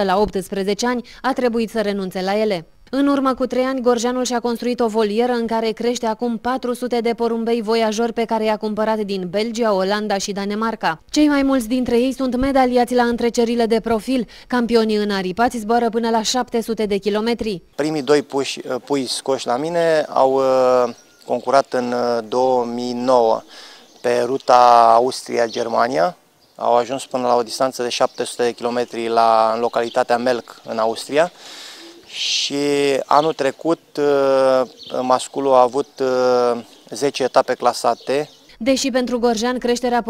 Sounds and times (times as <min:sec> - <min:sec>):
Speech: 0:00.0 - 0:23.4, 0:24.0 - 0:31.3, 0:32.1 - 0:40.1
Pigeon, dove: 0:31.5 - 0:32.2.